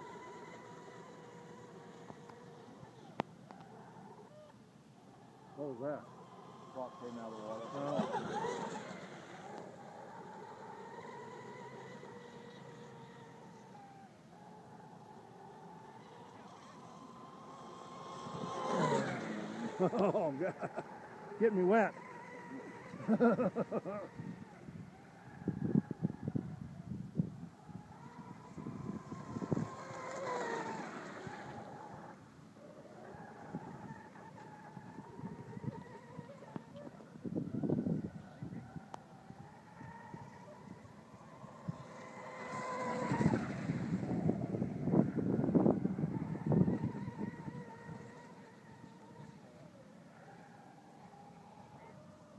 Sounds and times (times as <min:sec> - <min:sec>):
Motorboat, speedboat: 0:00.0 - 0:52.3.